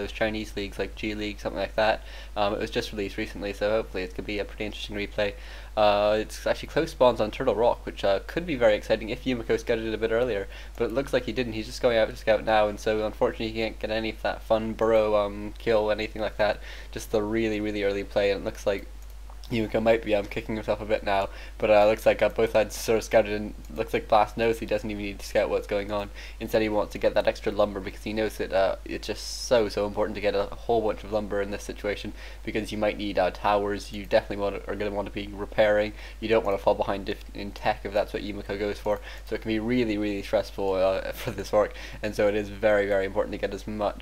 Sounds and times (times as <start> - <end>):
Speech: 0.0 - 18.9, 19.5 - 44.0.